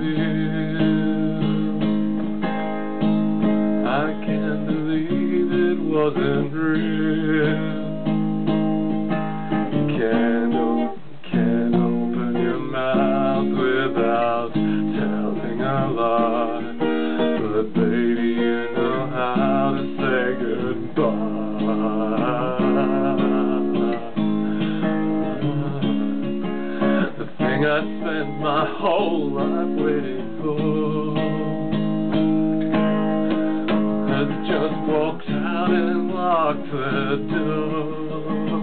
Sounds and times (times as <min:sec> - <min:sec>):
Singing: 0:00.0 - 0:01.7, 0:03.8 - 0:08.0, 0:09.8 - 0:26.4, 0:27.0 - 0:31.6, 0:34.0 - 0:38.6.